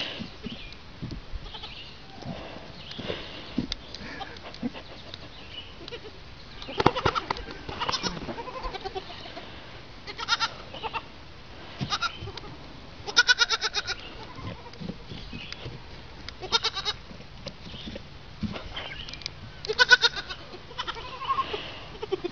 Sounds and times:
Livestock, farm animals, working animals: 0:00.0 - 0:22.3.

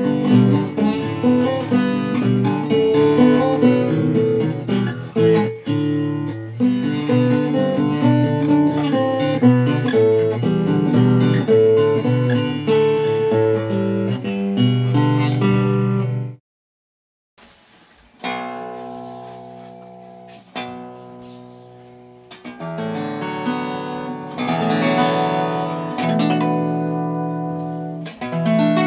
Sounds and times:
Acoustic guitar: 0:00.0 - 0:16.4, 0:17.4 - 0:28.8
Strum: 0:00.0 - 0:16.4, 0:17.4 - 0:28.8.

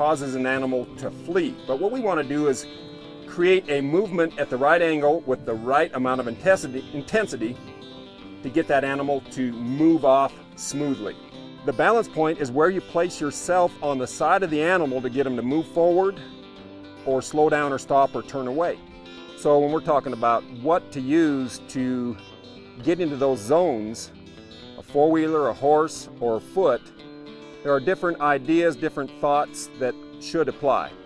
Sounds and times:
Speech: 0:00.0 - 0:02.6, 0:03.3 - 0:07.6, 0:08.4 - 0:16.2, 0:17.1 - 0:18.8, 0:19.4 - 0:22.2, 0:22.8 - 0:24.1, 0:24.8 - 0:26.8, 0:27.7 - 0:31.0
Music: 0:00.0 - 0:31.0.

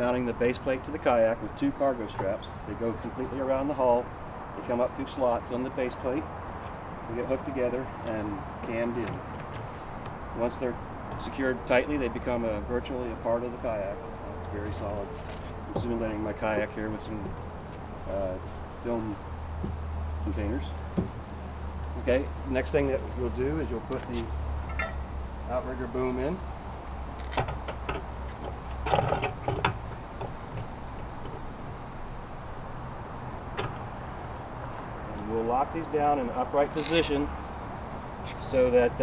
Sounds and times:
Speech: 0:00.0 - 0:06.3, 0:07.1 - 0:09.2, 0:10.4 - 0:17.3, 0:18.1 - 0:19.2, 0:20.2 - 0:20.8, 0:22.0 - 0:24.3, 0:25.5 - 0:26.4, 0:35.1 - 0:37.3, 0:38.3 - 0:39.0.

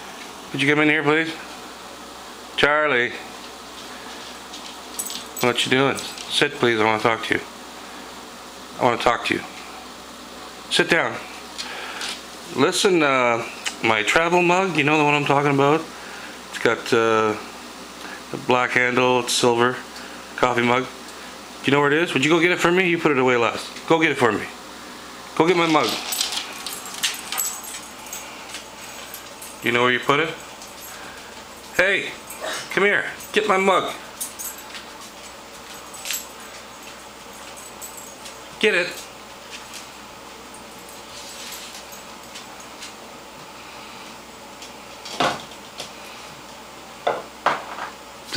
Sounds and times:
Speech: 0:00.5 - 0:01.5, 0:02.6 - 0:03.3, 0:05.4 - 0:07.5, 0:08.8 - 0:09.6, 0:10.7 - 0:11.3, 0:12.5 - 0:15.9, 0:16.5 - 0:17.5, 0:18.3 - 0:21.0, 0:21.6 - 0:24.6, 0:25.4 - 0:26.1, 0:29.6 - 0:30.4, 0:31.8 - 0:34.0, 0:38.6 - 0:39.0.

